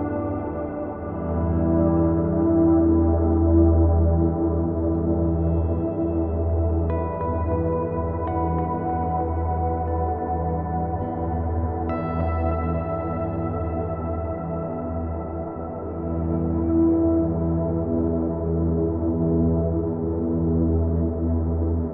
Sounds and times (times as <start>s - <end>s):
Ambient music: 0.0s - 21.9s.